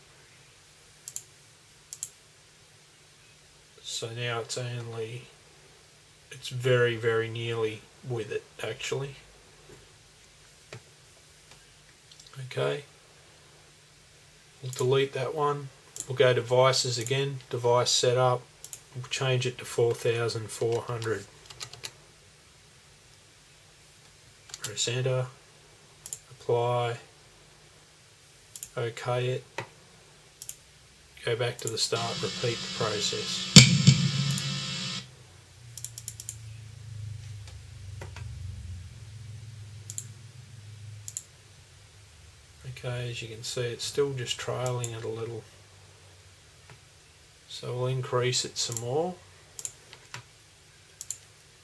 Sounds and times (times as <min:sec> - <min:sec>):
Speech: 0:03.8 - 0:05.4, 0:06.3 - 0:09.3, 0:12.3 - 0:12.9, 0:14.6 - 0:21.3, 0:24.6 - 0:25.4, 0:26.4 - 0:27.1, 0:28.7 - 0:29.5, 0:31.2 - 0:33.6, 0:42.6 - 0:45.5, 0:47.5 - 0:49.3.